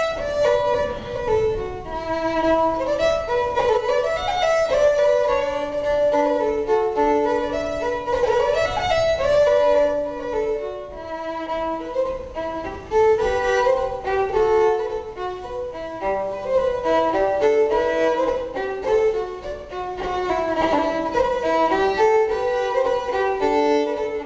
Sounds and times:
Violin, fiddle: 0.0s - 24.2s.

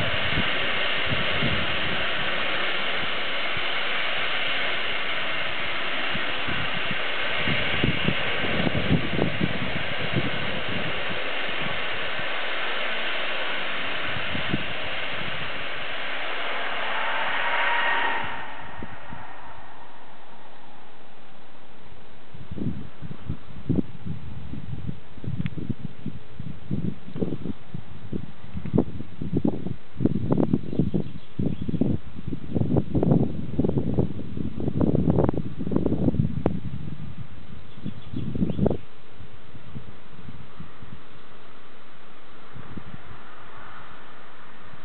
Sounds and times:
Eruption: 0.0s - 44.8s.

